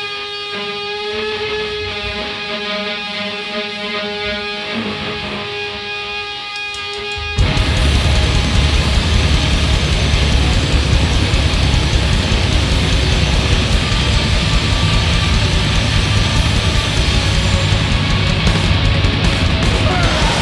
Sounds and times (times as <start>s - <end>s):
Heavy metal: 0.0s - 20.4s
Drum kit: 6.6s - 20.4s
Drum: 6.7s - 20.4s.